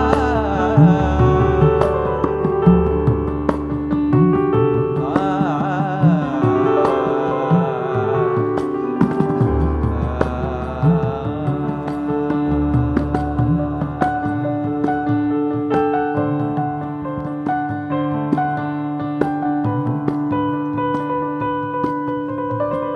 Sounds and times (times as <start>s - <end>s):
Carnatic music: 0.0s - 22.9s
Classical music: 0.0s - 22.9s
Percussion: 0.0s - 22.9s.